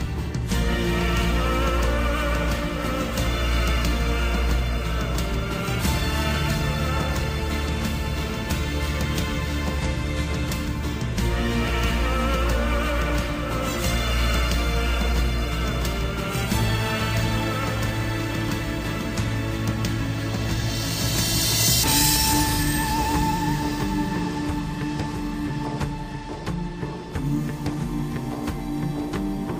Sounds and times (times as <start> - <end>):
Music: 0.0 - 29.6.